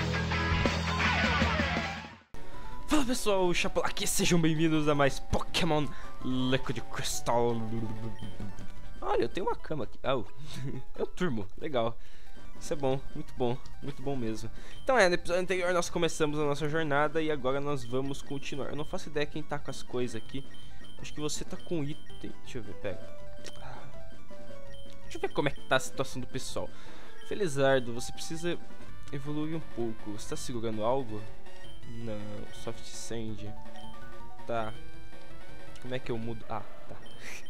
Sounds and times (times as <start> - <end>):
Music: 0.0 - 37.4
Speech: 2.9 - 8.2, 9.0 - 10.3, 11.0 - 12.0, 12.6 - 20.4, 21.0 - 23.0, 25.1 - 26.7, 27.3 - 31.3, 32.0 - 33.6, 34.5 - 34.8, 35.8 - 36.7.